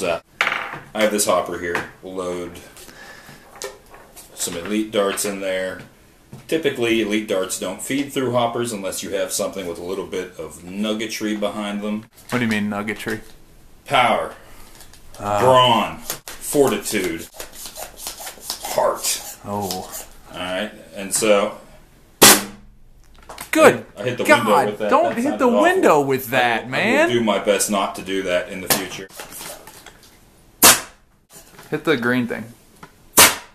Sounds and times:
Speech: 0:04.4 - 0:05.9, 0:06.5 - 0:13.2, 0:15.2 - 0:17.3, 0:18.7 - 0:21.6, 0:23.6 - 0:29.1
Cap gun: 0:22.2 - 0:22.6, 0:30.6 - 0:31.0, 0:33.2 - 0:33.5.

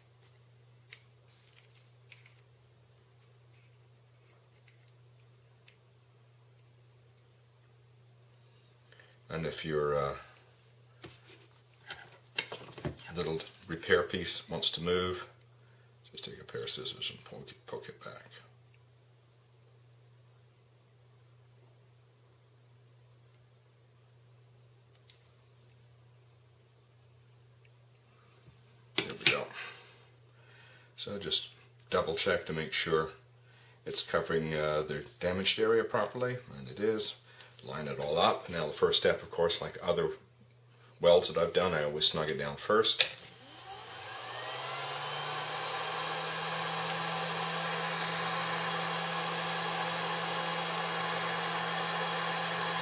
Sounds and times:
Speech: 0:09.3 - 0:10.4, 0:13.1 - 0:15.4, 0:16.1 - 0:18.5, 0:29.0 - 0:29.6, 0:31.0 - 0:33.2, 0:33.8 - 0:40.2, 0:41.0 - 0:43.1.

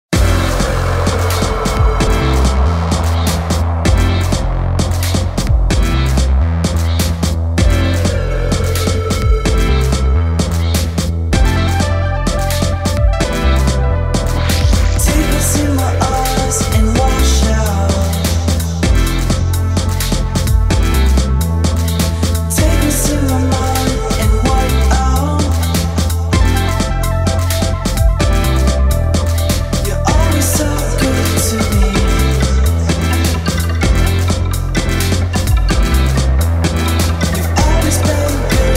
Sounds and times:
Electronica: 0:00.1 - 0:38.7.

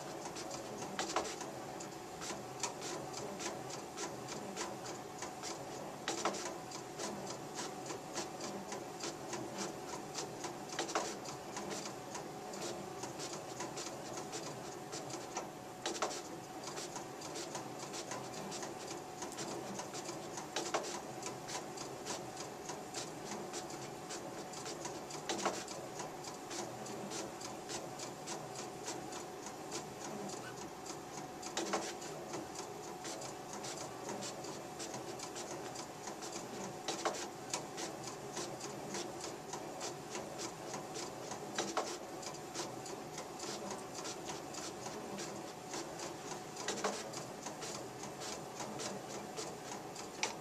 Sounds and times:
Printer: 0:00.0 - 0:50.4.

